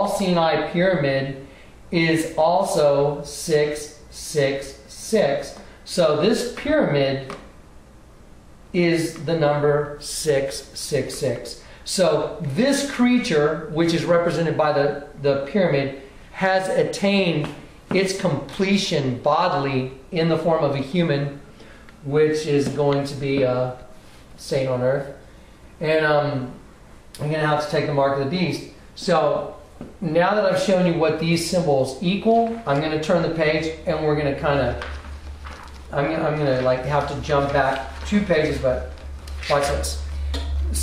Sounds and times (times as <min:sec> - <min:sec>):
Speech: 0:00.0 - 0:07.5, 0:08.7 - 0:21.4, 0:22.0 - 0:25.2, 0:25.8 - 0:26.6, 0:27.2 - 0:34.9, 0:35.9 - 0:40.8
Inside, small room: 0:00.0 - 0:40.8.